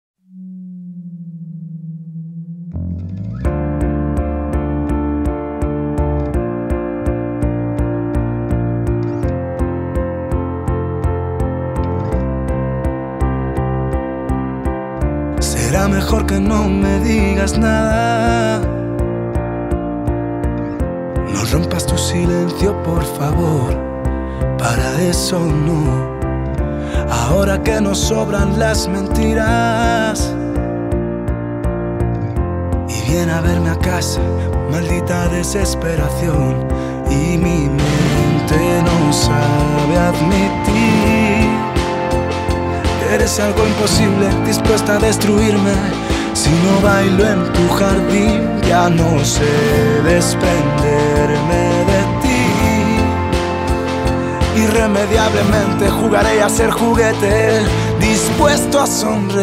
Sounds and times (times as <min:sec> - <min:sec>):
Music: 0:00.2 - 0:59.4.